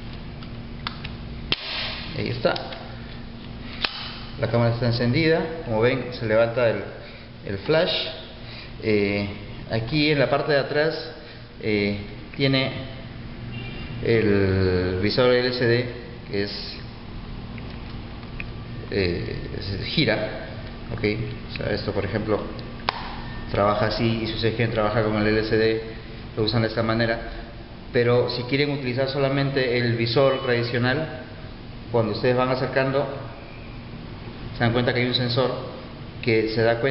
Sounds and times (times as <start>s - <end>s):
Speech: 2.2s - 2.9s, 4.4s - 13.0s, 14.0s - 16.9s, 18.9s - 22.6s, 23.5s - 31.3s, 31.9s - 33.4s, 34.6s - 36.9s.